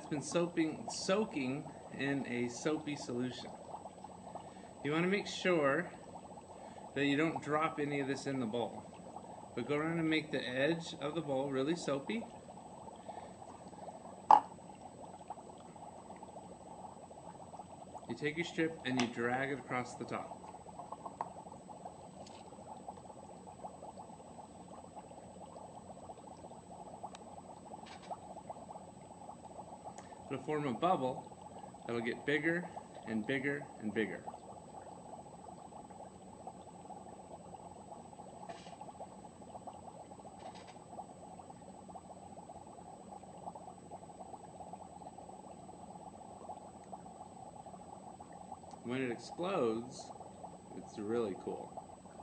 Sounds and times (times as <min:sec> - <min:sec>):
Speech: 0:00.0 - 0:03.5, 0:04.9 - 0:05.9, 0:07.0 - 0:08.8, 0:09.6 - 0:12.3, 0:18.1 - 0:20.4, 0:30.3 - 0:31.2, 0:31.9 - 0:34.3, 0:48.8 - 0:50.1, 0:50.7 - 0:51.7.